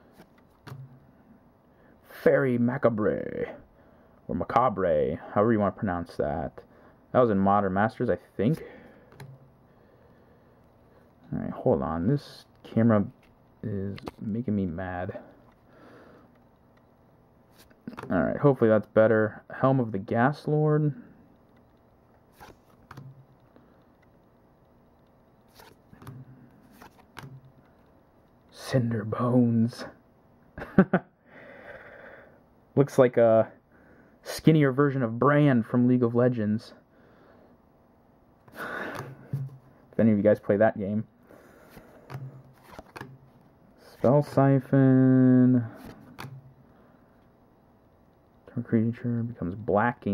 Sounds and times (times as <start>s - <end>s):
Inside, small room: 0.0s - 50.1s
Speech: 2.1s - 3.6s, 4.3s - 8.6s, 11.3s - 15.3s, 18.1s - 21.0s, 28.5s - 30.0s, 32.8s - 33.6s, 34.2s - 36.8s, 40.0s - 41.1s, 43.8s - 45.8s, 48.5s - 50.1s.